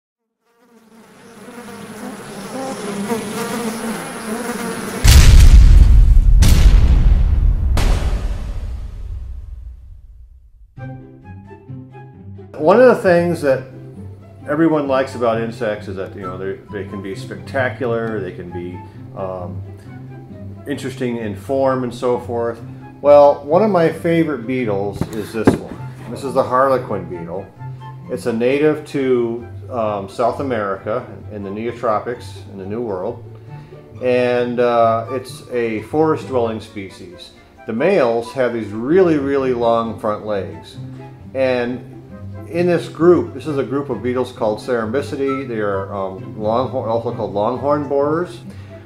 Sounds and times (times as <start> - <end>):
Fly, housefly: 0.3 - 5.8
Bee, wasp, etc.: 0.3 - 5.9.